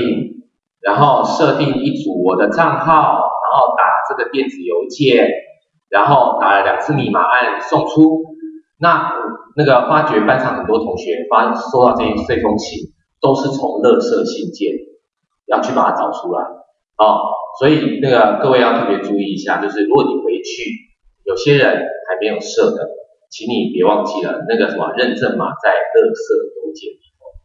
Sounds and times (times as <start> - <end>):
Speech: 0.0 - 14.9, 15.5 - 27.1.